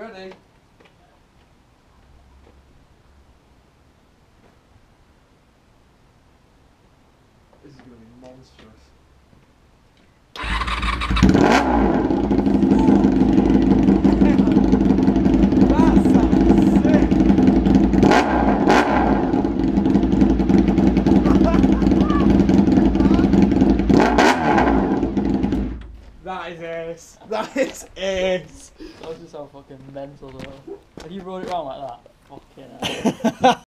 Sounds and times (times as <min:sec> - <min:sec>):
Speech: 0:07.6 - 0:08.9, 0:15.7 - 0:17.1, 0:26.2 - 0:32.9.